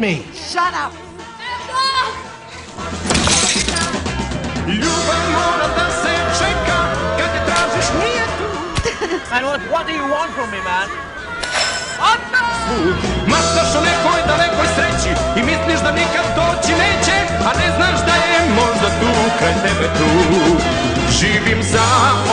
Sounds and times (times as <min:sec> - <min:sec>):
Music: 0:00.0 - 0:22.3
Male singing: 0:04.7 - 0:09.7, 0:13.2 - 0:22.3.